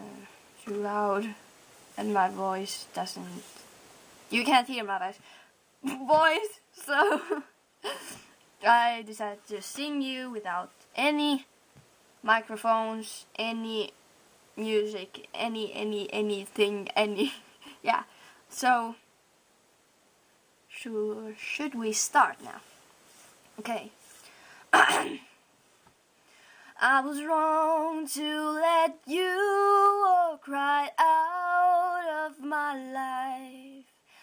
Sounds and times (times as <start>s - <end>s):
Speech: 0.0s - 1.4s, 2.0s - 3.5s, 4.3s - 5.2s, 5.8s - 7.5s, 8.6s - 11.5s, 12.2s - 14.0s, 14.6s - 19.0s, 20.7s - 22.7s, 23.6s - 24.0s.